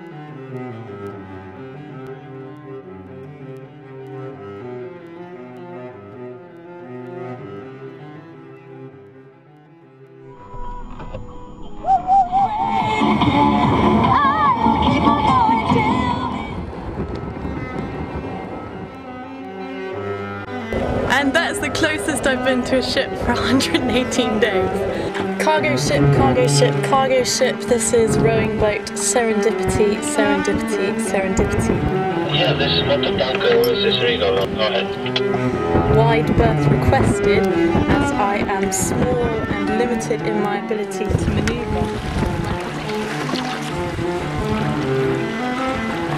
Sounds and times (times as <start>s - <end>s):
Music: 0.0s - 46.1s
Boat, Water vehicle: 13.0s - 46.1s
Speech: 21.1s - 31.7s, 32.3s - 35.2s, 35.9s - 41.8s.